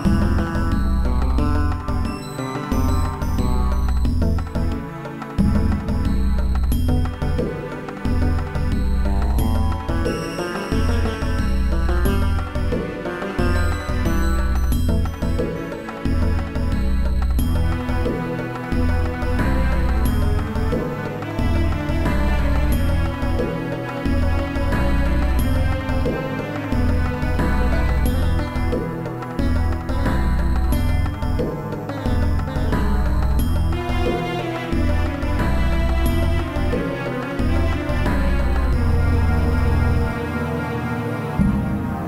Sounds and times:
Music: 0.0s - 42.0s.

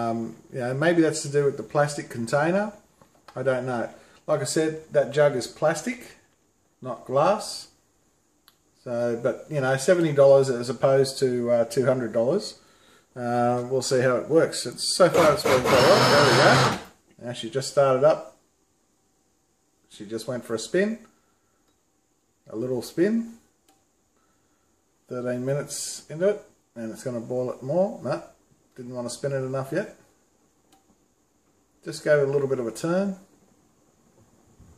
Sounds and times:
Blender: 15.1s - 16.9s.

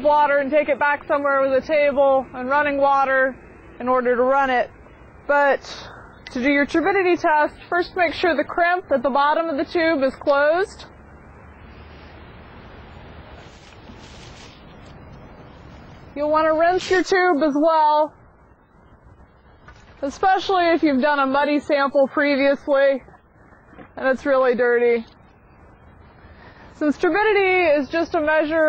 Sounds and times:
Speech: 0.0s - 4.7s, 5.3s - 10.9s, 16.2s - 18.1s, 20.0s - 23.0s, 24.0s - 25.1s, 26.8s - 28.6s.

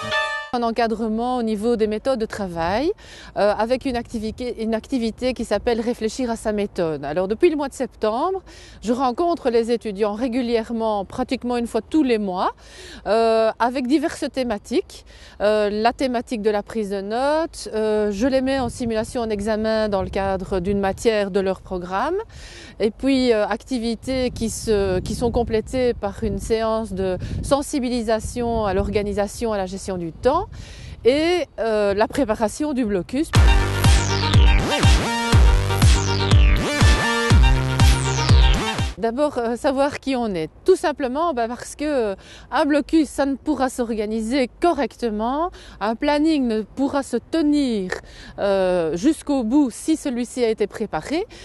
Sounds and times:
Music: 0.0s - 0.6s, 33.4s - 39.0s
Speech: 0.0s - 33.4s, 39.0s - 51.3s.

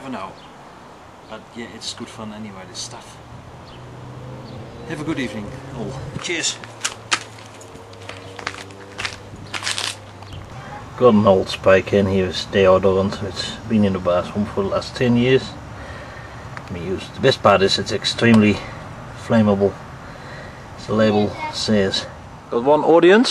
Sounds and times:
Speech: 0.0s - 0.4s, 1.3s - 3.2s, 4.9s - 6.6s, 10.6s - 15.6s, 20.8s - 23.3s.

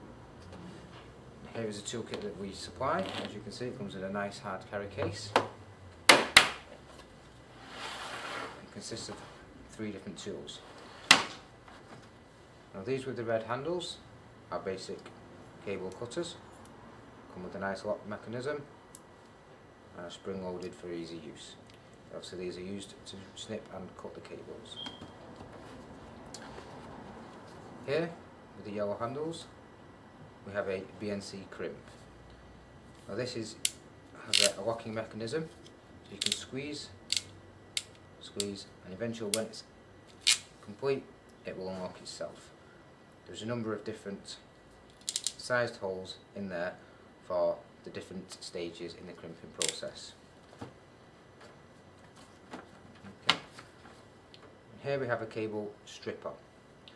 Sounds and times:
Speech: 1.5s - 5.5s, 8.7s - 10.7s, 12.7s - 16.4s, 17.3s - 18.7s, 19.9s - 24.8s, 27.8s - 29.6s, 30.4s - 31.9s, 33.1s - 33.6s, 34.2s - 37.0s, 38.2s - 39.7s, 40.6s - 42.6s, 43.2s - 44.5s, 45.4s - 50.2s, 54.8s - 56.4s.

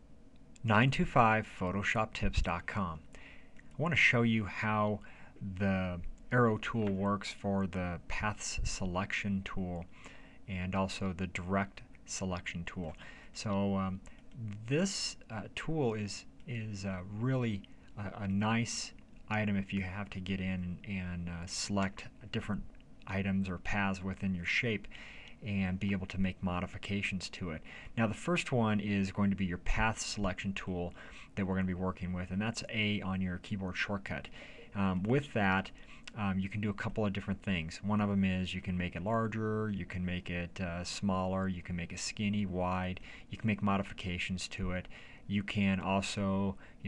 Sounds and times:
Speech: 0.6s - 3.1s, 3.7s - 9.9s, 10.5s - 46.8s.

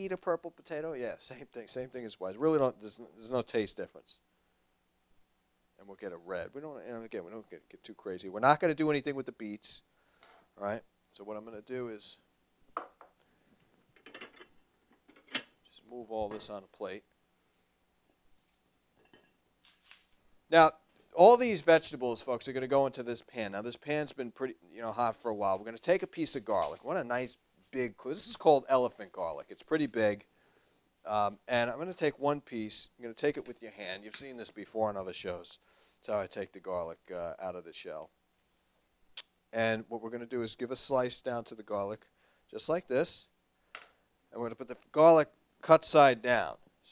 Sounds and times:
Dishes, pots, and pans: 14.0s - 15.6s, 19.0s - 19.4s.

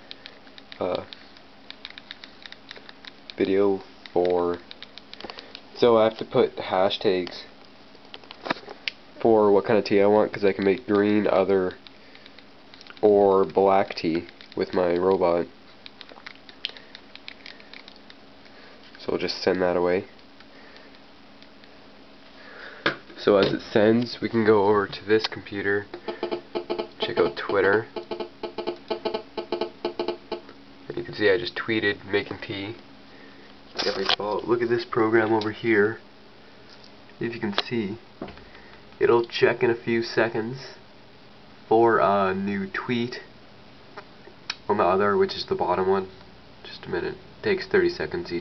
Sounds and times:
Speech: 0.8s - 1.1s, 3.4s - 4.6s, 5.8s - 7.5s, 9.2s - 11.8s, 13.0s - 15.5s, 19.0s - 20.1s, 23.2s - 25.9s, 27.0s - 27.9s, 30.9s - 32.8s, 33.8s - 36.0s, 37.2s - 38.0s, 39.0s - 40.8s, 41.7s - 43.3s, 44.7s - 48.4s.

